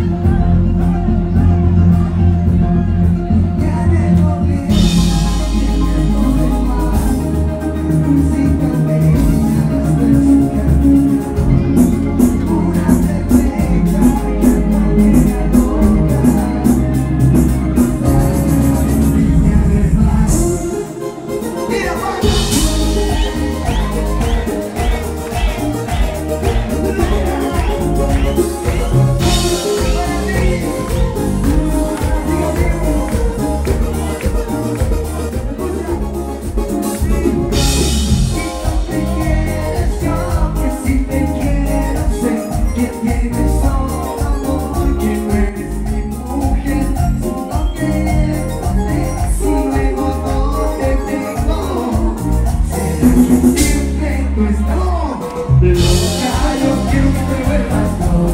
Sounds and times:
Music: 0:00.0 - 0:58.3
Applause: 0:23.1 - 0:35.6.

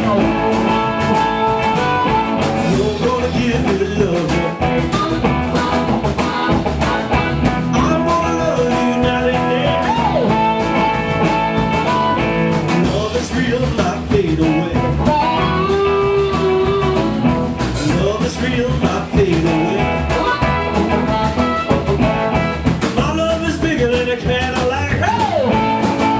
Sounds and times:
Music: 0:00.0 - 0:26.1.

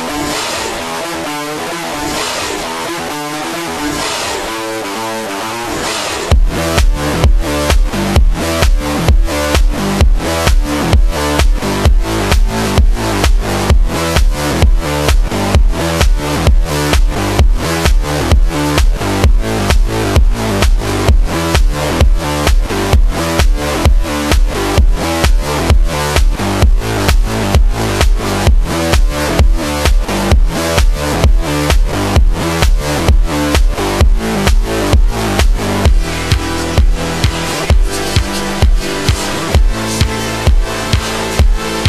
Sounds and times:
Music: 0:00.0 - 0:41.8.

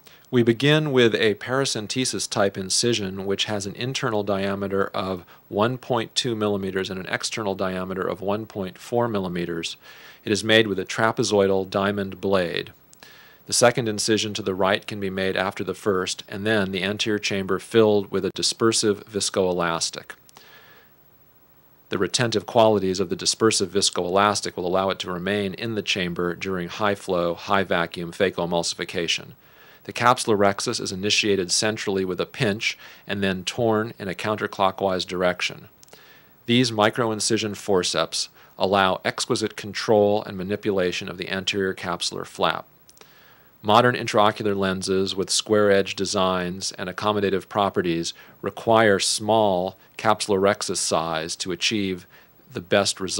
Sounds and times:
Speech: 0:00.3 - 0:12.8, 0:13.5 - 0:20.2, 0:21.9 - 0:35.8, 0:36.5 - 0:42.7, 0:43.6 - 0:53.1.

